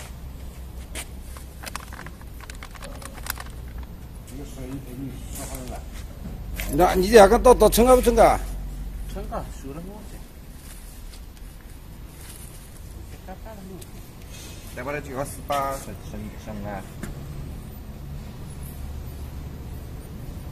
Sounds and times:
Speech: 0:04.3 - 0:05.9, 0:06.7 - 0:08.5, 0:14.8 - 0:16.9.

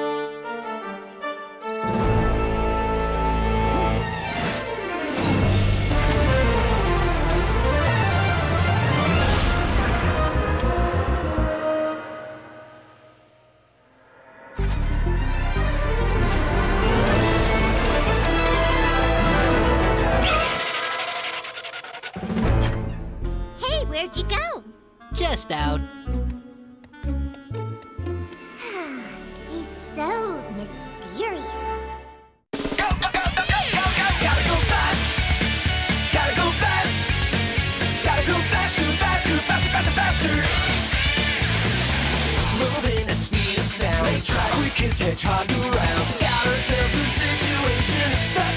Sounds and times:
Music: 0:00.0 - 0:20.7, 0:22.2 - 0:48.5
Speech: 0:23.6 - 0:25.9, 0:28.8 - 0:31.8.

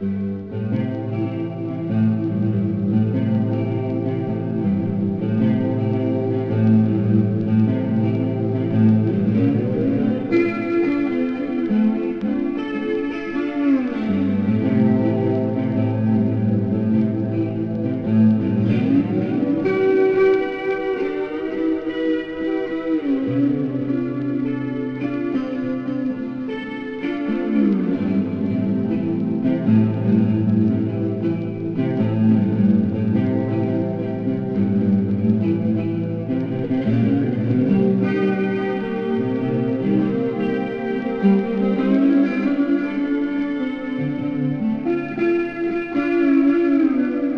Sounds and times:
Strum: 0:00.0 - 0:47.3.

